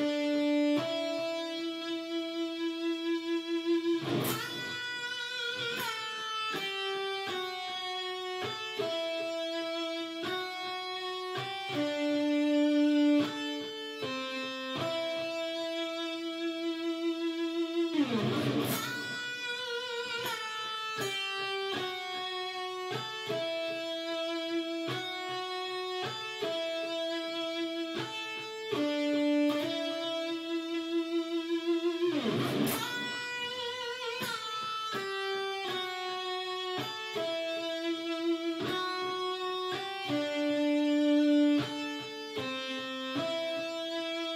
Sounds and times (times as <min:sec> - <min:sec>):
Music: 0:00.0 - 0:44.3.